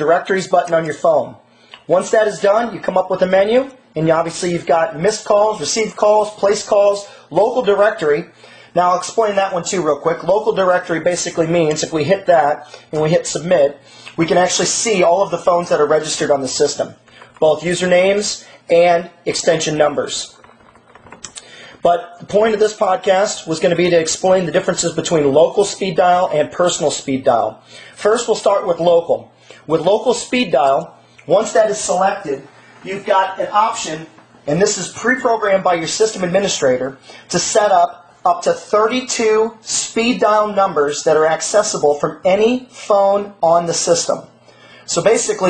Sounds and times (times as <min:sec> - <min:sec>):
Speech: 0:00.0 - 0:20.4, 0:21.8 - 0:45.5.